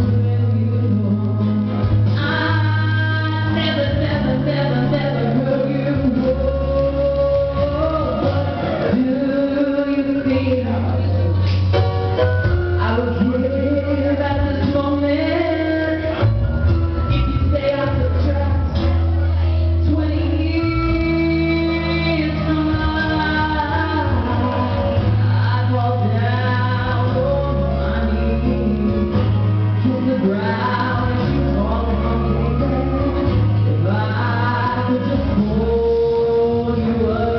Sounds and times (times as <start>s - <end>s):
Male singing: 0.0s - 11.4s, 12.8s - 16.4s, 17.1s - 37.3s
Music: 0.0s - 37.3s.